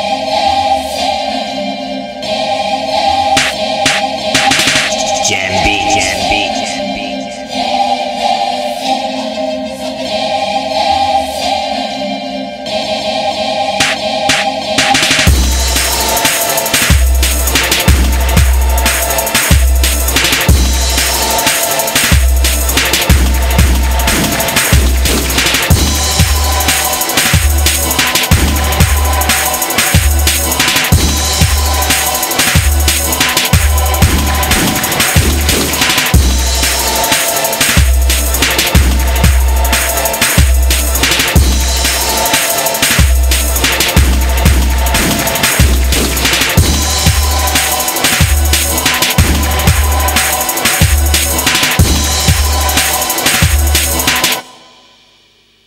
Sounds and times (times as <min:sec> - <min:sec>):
Music: 0:00.0 - 0:55.6.